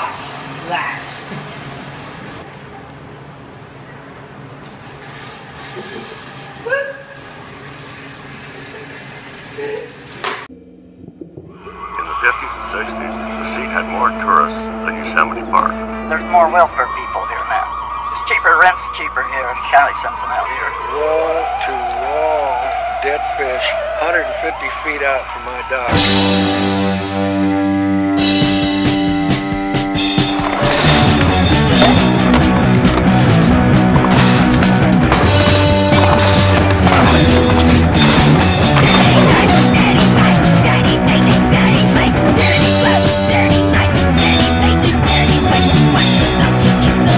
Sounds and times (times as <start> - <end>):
Music: 11.2 - 18.2, 25.8 - 47.1.